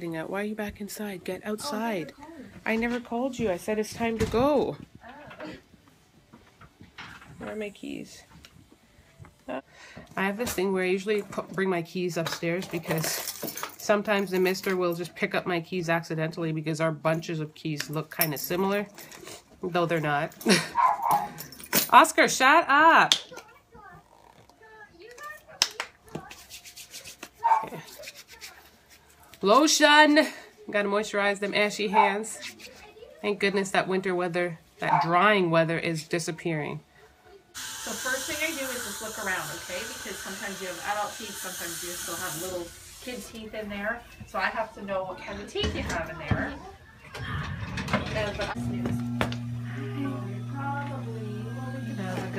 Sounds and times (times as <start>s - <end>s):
Dog: 20.7s - 21.4s, 27.4s - 27.9s, 34.8s - 35.2s.